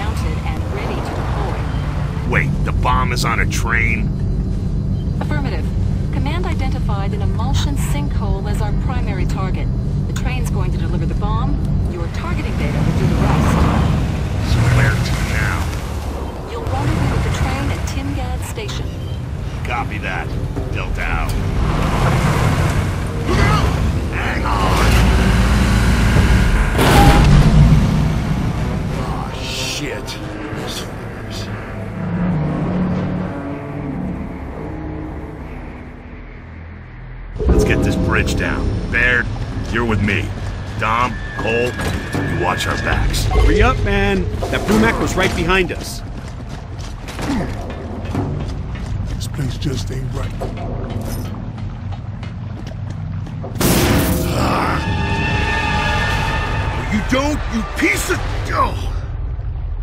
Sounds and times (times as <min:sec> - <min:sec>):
Music: 0:16.9 - 0:26.3, 0:28.7 - 0:45.5.